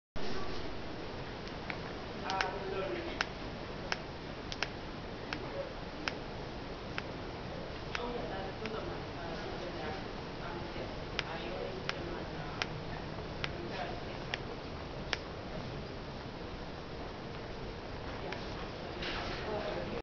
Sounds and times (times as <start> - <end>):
Speech: 2.2 - 3.3, 7.9 - 14.5, 18.1 - 20.0.